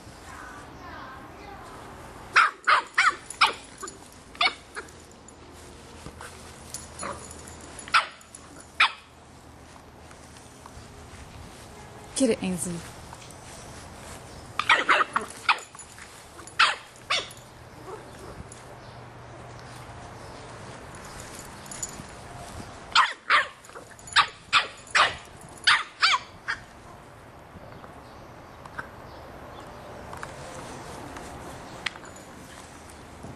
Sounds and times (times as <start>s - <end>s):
Bark: 2.4s - 3.6s, 14.6s - 15.6s, 16.6s - 18.4s, 23.0s - 23.6s, 24.2s - 26.2s
Canidae, dogs, wolves: 14.6s - 18.7s.